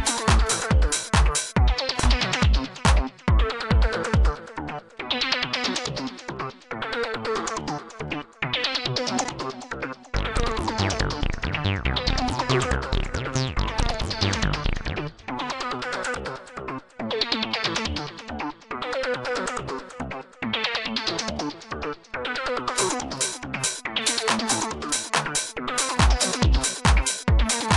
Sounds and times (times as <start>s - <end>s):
Techno: 0.0s - 6.2s, 10.2s - 15.7s, 22.4s - 27.7s.